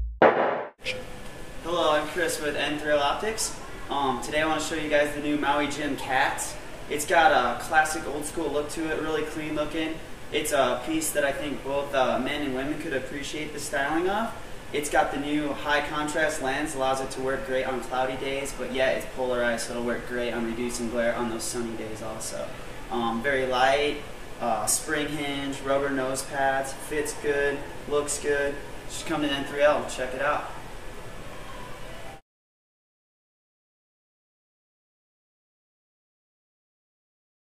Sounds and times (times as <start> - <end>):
Speech: 1.6 - 30.6.